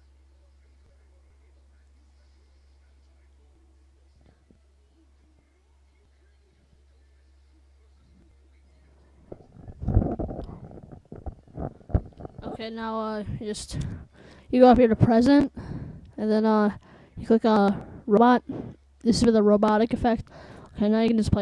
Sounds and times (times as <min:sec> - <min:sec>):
Speech: 0:00.0 - 0:09.5, 0:12.4 - 0:15.6, 0:16.2 - 0:21.4.